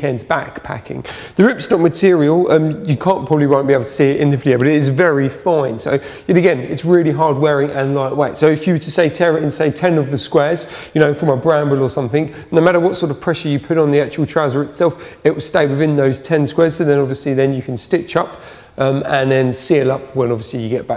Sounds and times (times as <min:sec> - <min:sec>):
Speech: 0:00.0 - 0:20.9.